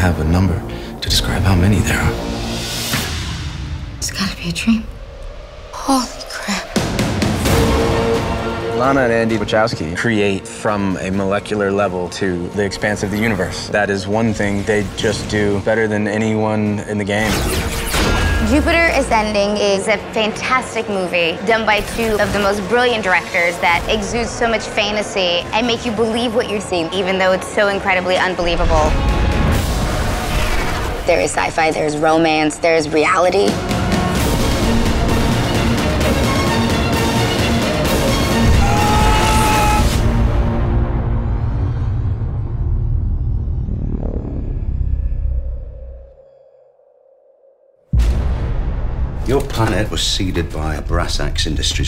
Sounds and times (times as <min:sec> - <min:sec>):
Music: 0:00.0 - 0:44.4, 0:47.9 - 0:51.8.